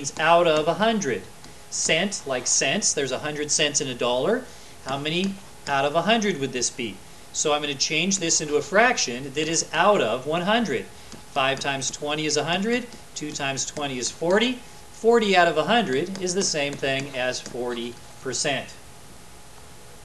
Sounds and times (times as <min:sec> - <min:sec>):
Writing: 0:00.0 - 0:01.6, 0:10.3 - 0:14.5, 0:15.4 - 0:18.1
Speech: 0:00.0 - 0:18.8.